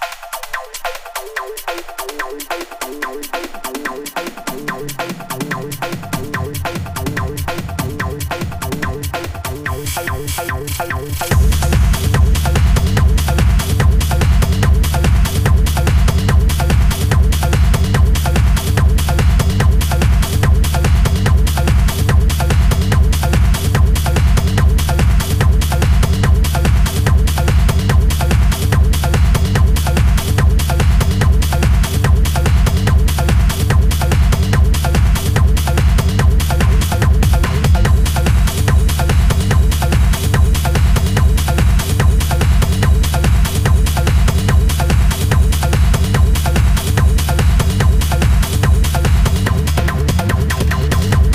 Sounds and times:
House music: 0:00.0 - 0:51.3
Techno: 0:00.0 - 0:51.3.

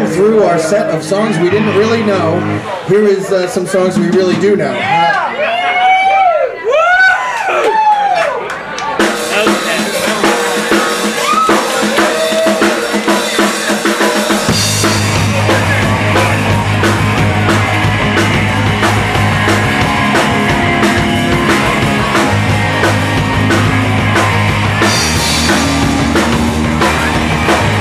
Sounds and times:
Rock and roll: 0:00.0 - 0:05.2, 0:08.8 - 0:27.8.

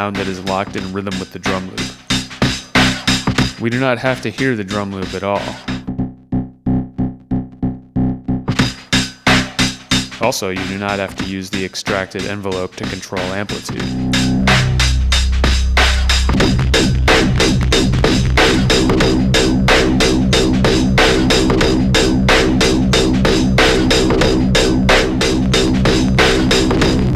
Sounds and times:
Speech: 0:00.0 - 0:01.9, 0:03.6 - 0:05.7, 0:10.2 - 0:13.9
Synthesizer: 0:13.0 - 0:27.1.

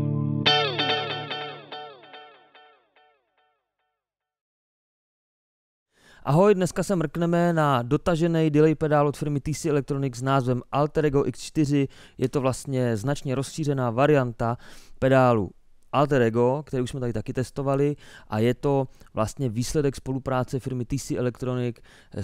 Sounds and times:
Musical instrument: 0:00.0 - 0:03.1
Speech: 0:06.2 - 0:22.2.

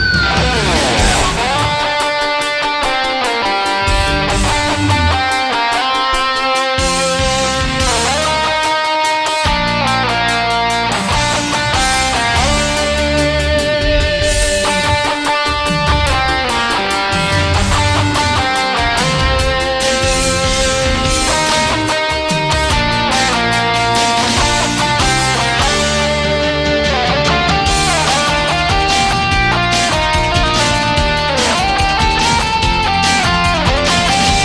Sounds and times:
Strum: 0:00.0 - 0:08.9, 0:09.5 - 0:34.4.

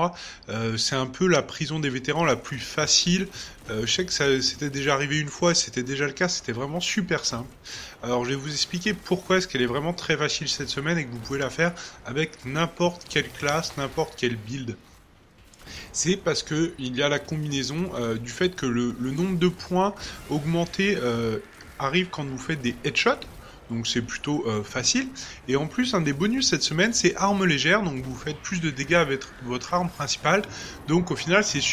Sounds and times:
Speech: 0:00.0 - 0:14.8, 0:15.8 - 0:31.7.

